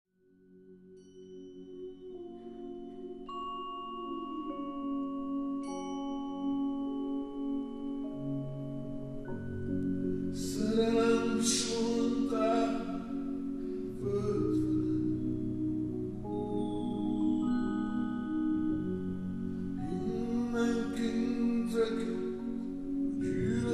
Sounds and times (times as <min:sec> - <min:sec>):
Musical instrument: 0:00.9 - 0:23.7.